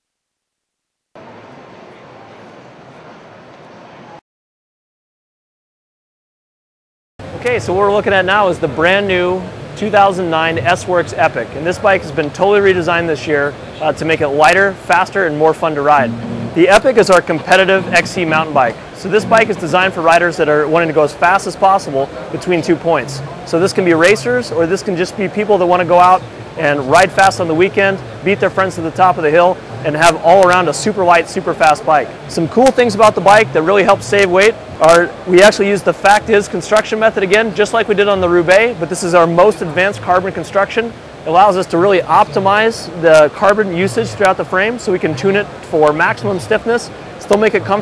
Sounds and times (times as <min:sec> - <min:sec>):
Speech: 0:07.4 - 0:47.8.